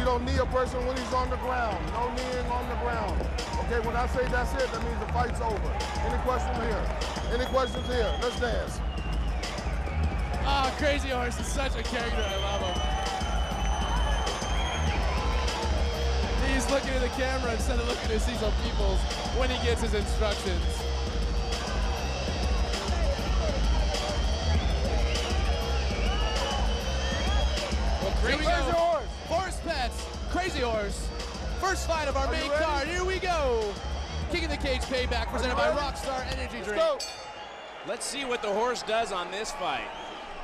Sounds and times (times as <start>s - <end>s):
Music: 0.0s - 38.8s
Speech: 16.4s - 20.6s.